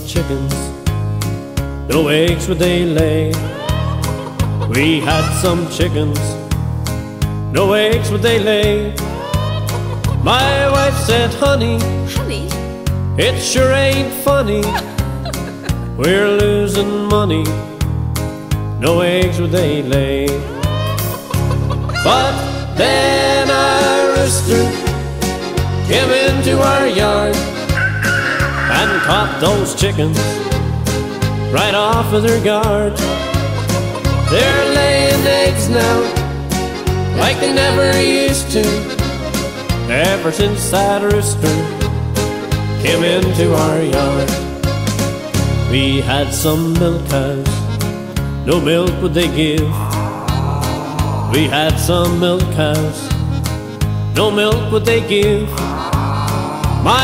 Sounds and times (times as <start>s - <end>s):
Music: 0.0s - 57.0s.